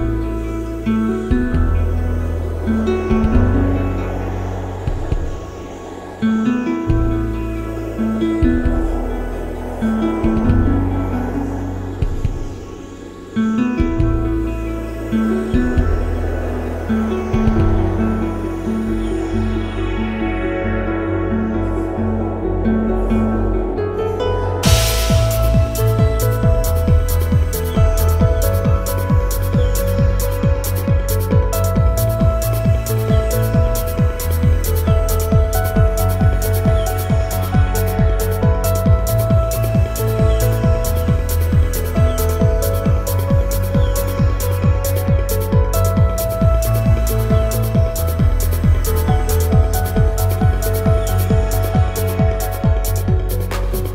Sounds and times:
Music: 0.0 - 53.9.

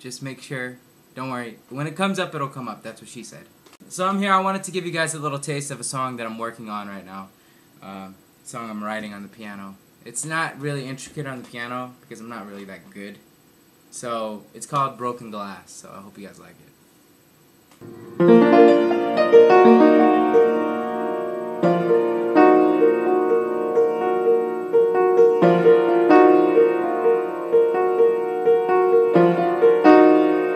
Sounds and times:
Speech: 0.0 - 13.3, 13.9 - 16.8.

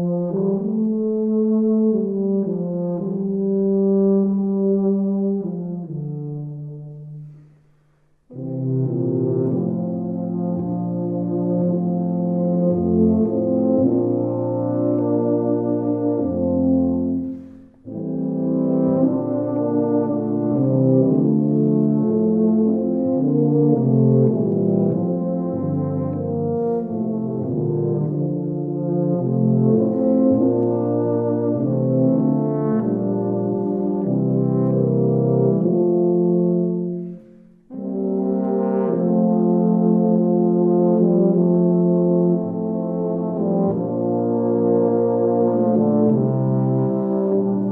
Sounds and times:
Brass instrument: 0.0 - 47.7.

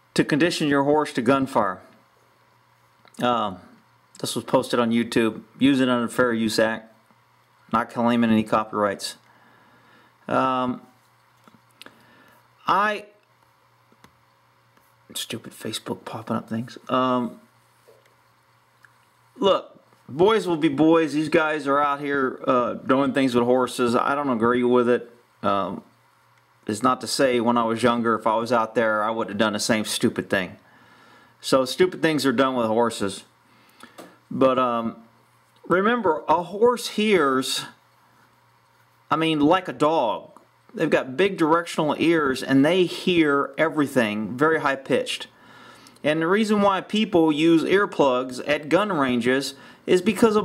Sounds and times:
Speech: 0.2 - 2.0, 3.2 - 7.0, 7.7 - 9.2, 10.3 - 11.0, 12.6 - 13.2, 15.1 - 17.5, 19.4 - 25.9, 26.6 - 30.6, 31.4 - 33.3, 34.3 - 37.8, 39.1 - 45.3, 46.0 - 50.4.

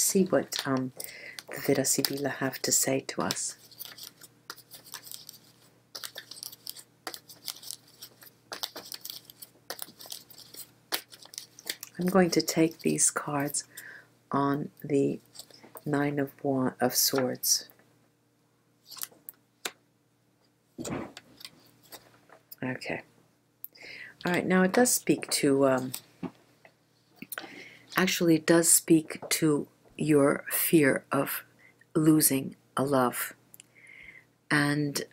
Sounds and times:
Speech: 0.0 - 3.6, 12.0 - 13.7, 14.3 - 15.2, 15.9 - 17.7, 22.6 - 23.1, 24.2 - 26.0, 28.0 - 33.4, 34.5 - 35.1
Tearing: 3.6 - 11.9.

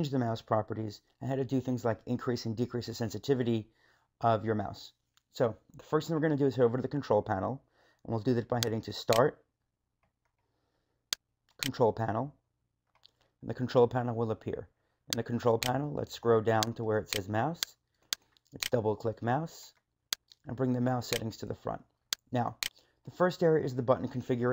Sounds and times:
Speech: 0.0 - 9.4, 11.6 - 12.4, 13.4 - 17.8, 18.6 - 19.8, 20.4 - 24.5.

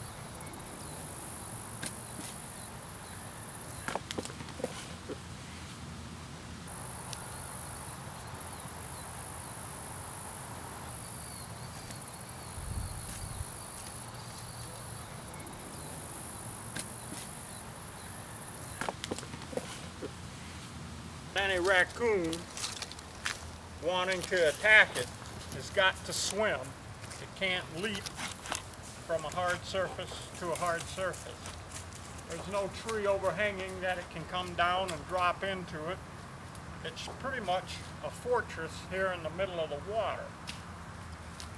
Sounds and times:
Speech: 21.4 - 22.5, 23.8 - 28.1, 29.1 - 31.4, 32.3 - 36.0, 36.8 - 40.3.

